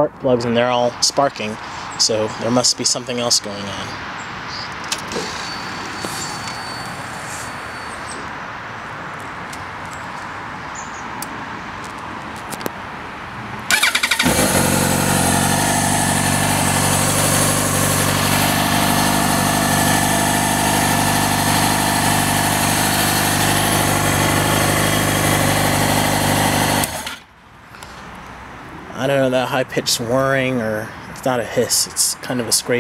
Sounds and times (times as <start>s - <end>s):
Motorcycle: 4.9s - 8.3s, 13.7s - 28.1s.